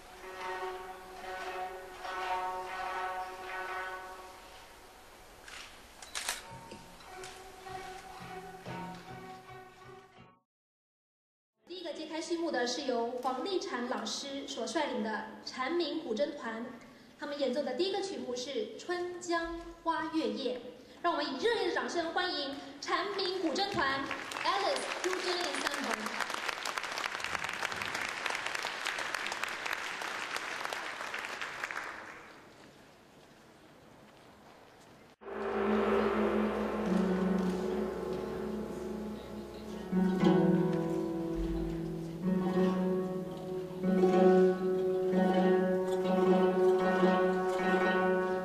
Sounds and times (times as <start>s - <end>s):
Speech: 11.6s - 26.2s.